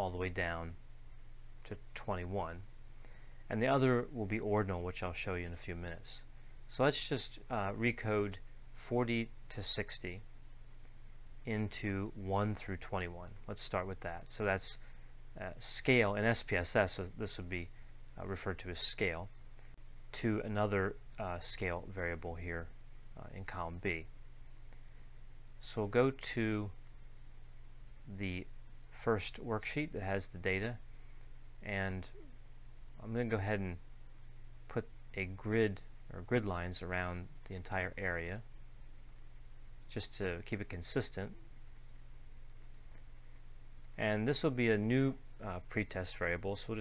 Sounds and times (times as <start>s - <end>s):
Speech: 0.0s - 0.8s, 1.7s - 2.7s, 3.5s - 10.3s, 11.5s - 14.8s, 15.4s - 19.4s, 20.1s - 24.1s, 25.6s - 26.8s, 28.1s - 30.8s, 31.6s - 32.2s, 33.0s - 33.8s, 34.7s - 38.5s, 39.9s - 41.4s, 44.0s - 46.8s.